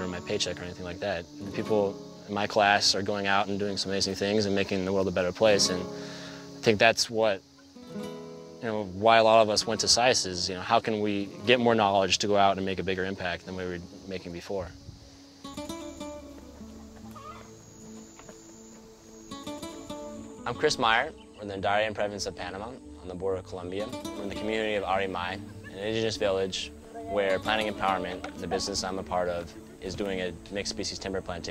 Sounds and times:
Speech: 0:00.0 - 0:05.9, 0:06.6 - 0:07.4, 0:08.6 - 0:14.8, 0:20.4 - 0:31.5
Music: 0:00.0 - 0:31.5.

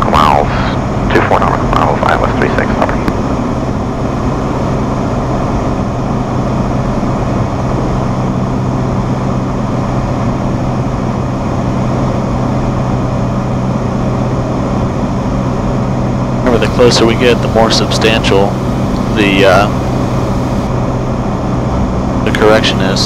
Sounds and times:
Speech: 0:00.0 - 0:03.1, 0:16.4 - 0:19.8, 0:22.3 - 0:23.0
Aircraft: 0:00.0 - 0:23.0.

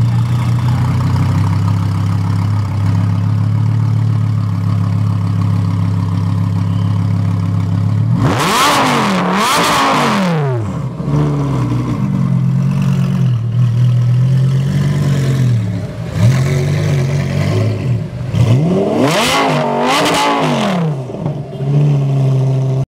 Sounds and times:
Car: 0:00.0 - 0:22.8
Accelerating, revving, vroom: 0:08.1 - 0:11.6, 0:16.2 - 0:21.1.

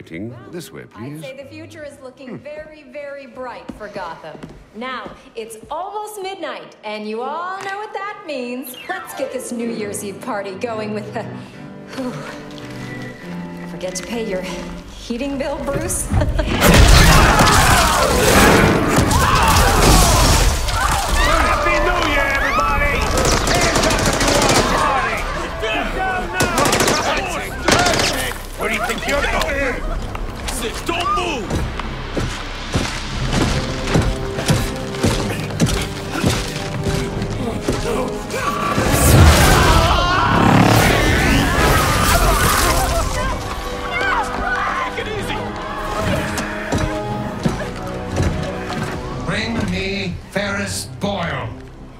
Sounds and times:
Music: 0:05.5 - 0:51.9.

